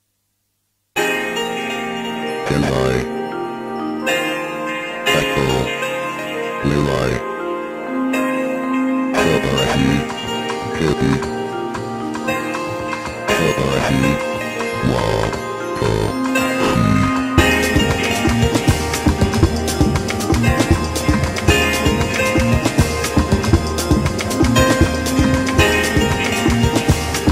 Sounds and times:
Music: 0:01.0 - 0:27.3.

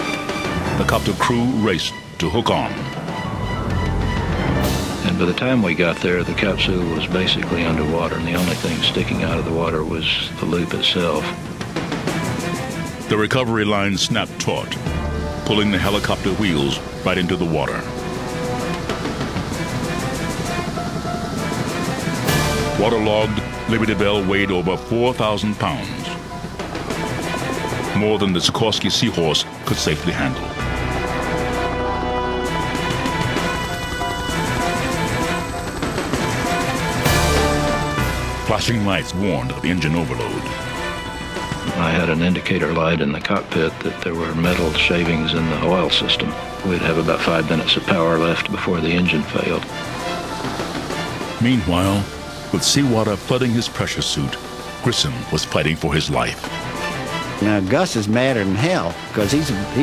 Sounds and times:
Music: 0:00.0 - 0:59.8
Speech: 0:00.7 - 0:03.0, 0:05.0 - 0:11.4, 0:13.1 - 0:17.9, 0:22.8 - 0:26.2, 0:27.9 - 0:30.5, 0:38.5 - 0:40.5, 0:41.7 - 0:49.7, 0:51.4 - 0:56.4, 0:57.4 - 0:59.8.

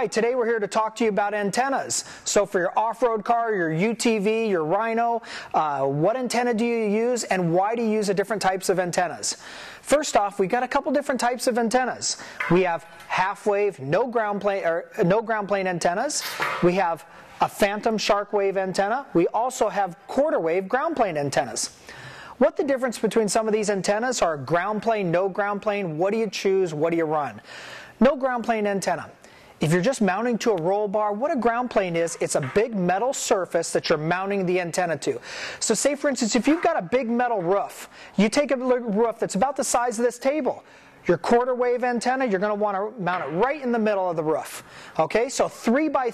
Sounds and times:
Speech: 0:00.0 - 0:21.8, 0:22.4 - 0:27.4, 0:28.0 - 0:46.1.

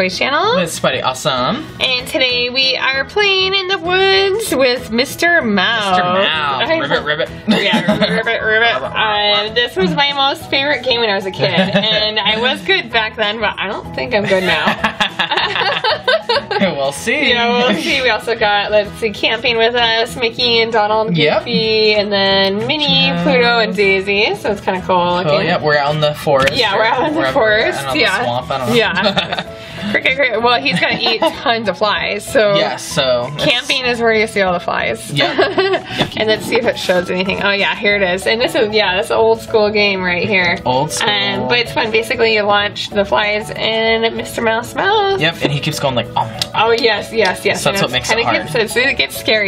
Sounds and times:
Music: 0:00.0 - 0:49.4
Speech: 0:16.6 - 0:29.0, 0:43.0 - 0:49.4.

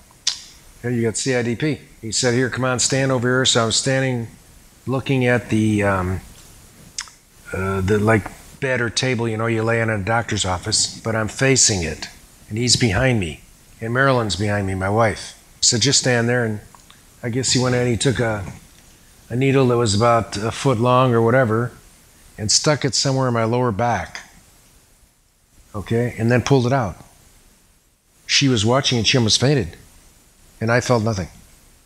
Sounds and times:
Inside, small room: 0:00.0 - 0:31.8
Speech: 0:00.8 - 0:06.3, 0:07.5 - 0:18.6, 0:19.3 - 0:21.8, 0:22.4 - 0:24.4, 0:25.7 - 0:27.1, 0:28.3 - 0:29.9, 0:30.6 - 0:31.4.

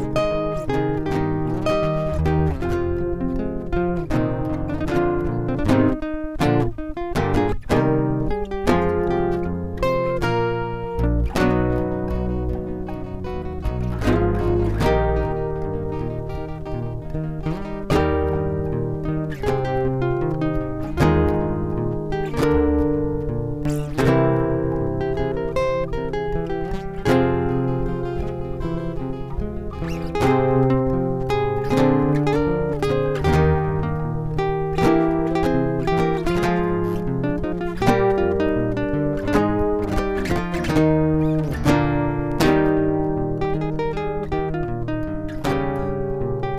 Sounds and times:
Acoustic guitar: 0:00.0 - 0:46.5.

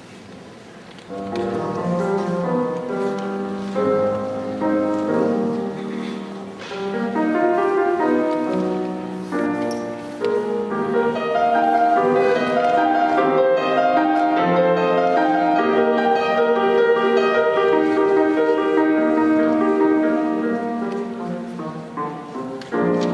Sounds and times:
Music: 0:00.9 - 0:23.1.

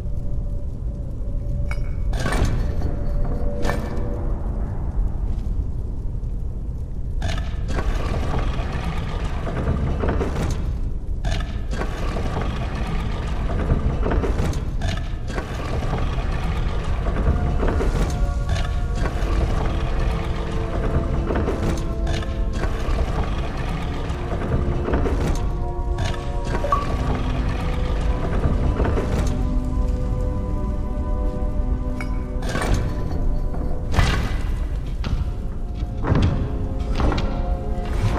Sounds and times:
Music: 0:00.0 - 0:38.1.

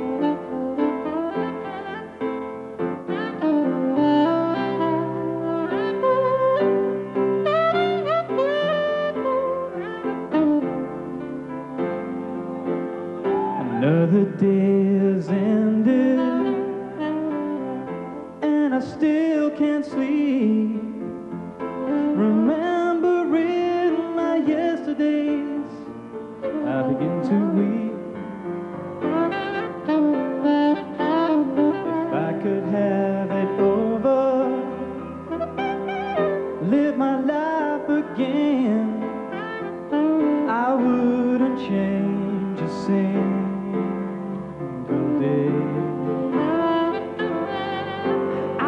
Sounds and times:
Music: 0:00.0 - 0:48.6.

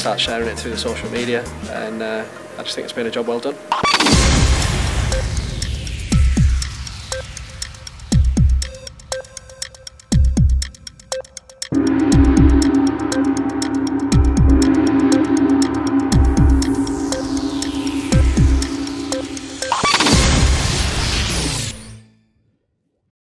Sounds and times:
Gong: 0:03.8 - 0:09.8, 0:11.7 - 0:21.8.

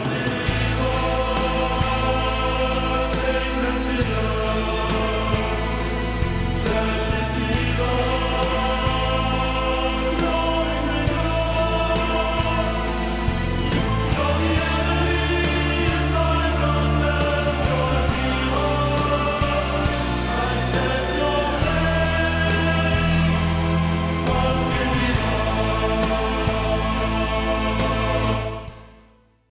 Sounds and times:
Music: 0:00.0 - 0:29.5.

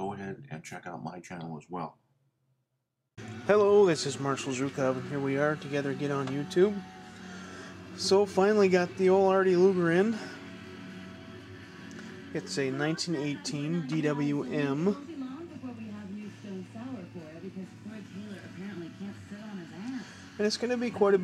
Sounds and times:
Speech: 0:00.0 - 0:02.0, 0:12.4 - 0:19.8, 0:20.4 - 0:21.2
Music: 0:03.2 - 0:21.2.

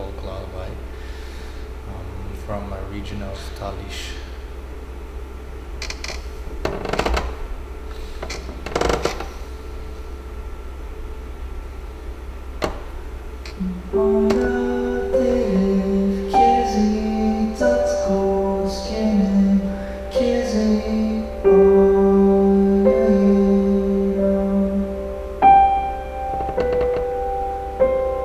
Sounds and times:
Lullaby: 0:13.5 - 0:28.2.

